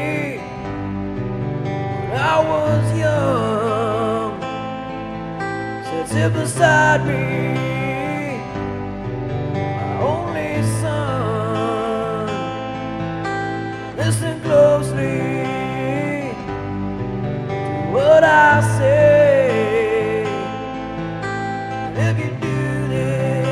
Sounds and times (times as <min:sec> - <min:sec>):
Male singing: 0:00.0 - 0:00.5, 0:02.1 - 0:04.5, 0:05.8 - 0:08.6, 0:09.9 - 0:12.6, 0:14.0 - 0:16.5, 0:17.8 - 0:20.6, 0:21.9 - 0:23.5
Music: 0:00.0 - 0:23.5.